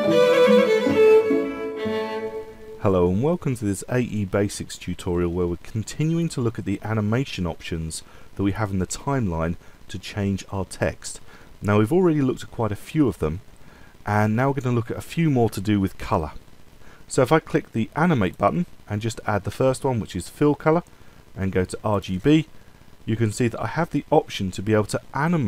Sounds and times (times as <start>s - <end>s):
Speech: 2.8s - 13.4s, 14.1s - 16.4s, 17.1s - 22.5s, 23.1s - 25.4s.